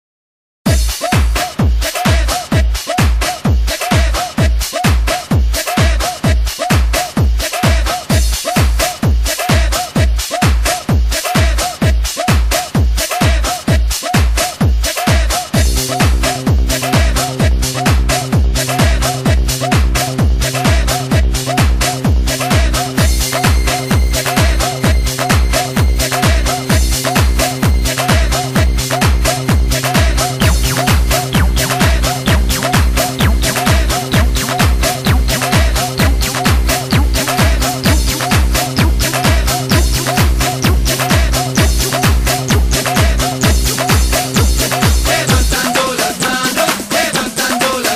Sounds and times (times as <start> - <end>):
Disco: 0.7 - 47.9
House music: 0.7 - 47.9.